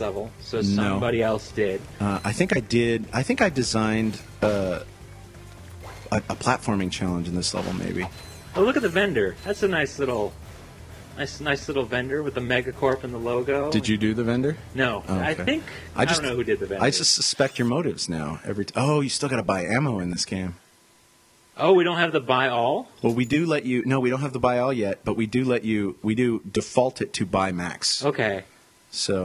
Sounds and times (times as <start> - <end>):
Speech: 0.0 - 4.8, 6.1 - 10.3, 11.2 - 20.6, 21.6 - 29.2.